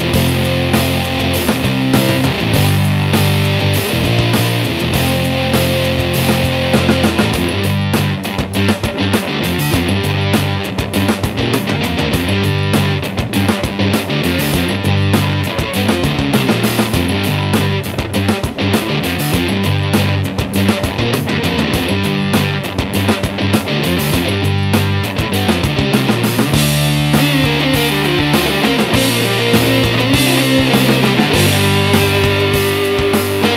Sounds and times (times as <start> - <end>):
Music: 0.0 - 33.5.